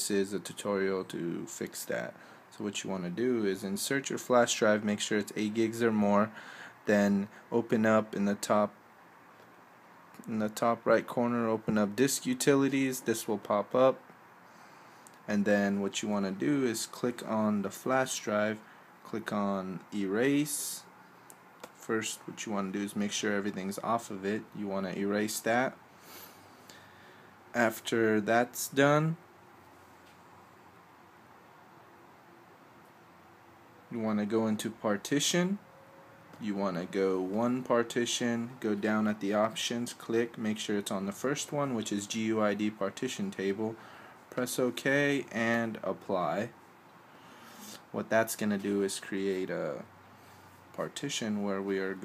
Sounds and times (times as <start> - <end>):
Speech: 0.0 - 8.8, 10.2 - 14.0, 15.3 - 20.9, 21.8 - 25.8, 27.6 - 29.2, 33.9 - 35.6, 36.4 - 46.6, 47.8 - 49.9, 50.7 - 52.0.